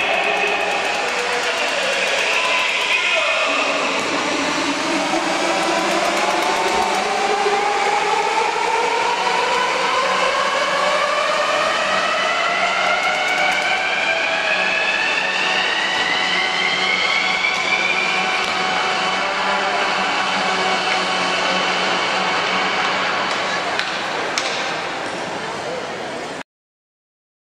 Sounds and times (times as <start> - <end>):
Speech: 0.0 - 7.1, 23.3 - 26.4
Music: 0.0 - 23.7
Inside, large room or hall: 0.0 - 26.4.